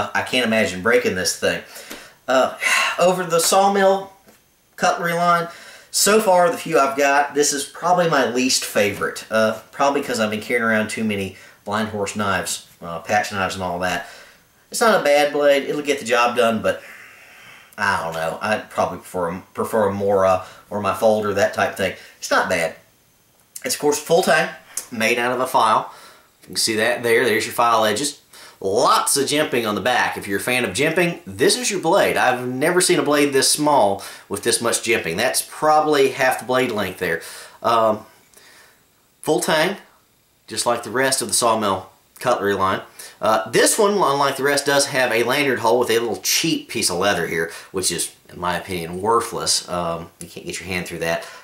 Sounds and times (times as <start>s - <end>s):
Speech: 0.0s - 1.7s, 2.3s - 4.2s, 4.8s - 14.1s, 14.7s - 16.8s, 17.8s - 22.8s, 23.6s - 38.1s, 39.2s - 39.9s, 40.5s - 51.3s.